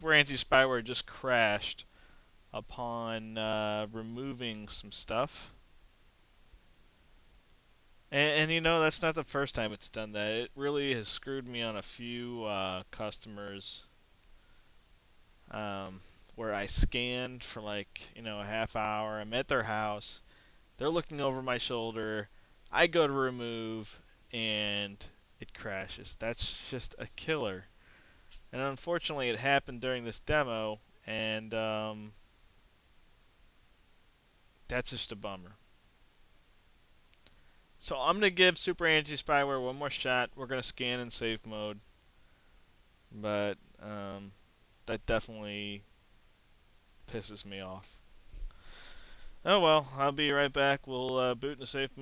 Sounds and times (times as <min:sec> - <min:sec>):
Speech: 0:00.0 - 0:01.9, 0:02.5 - 0:05.6, 0:08.1 - 0:13.9, 0:15.5 - 0:27.7, 0:28.5 - 0:32.2, 0:34.7 - 0:35.6, 0:37.8 - 0:41.8, 0:43.1 - 0:45.9, 0:47.1 - 0:48.0, 0:49.4 - 0:52.0.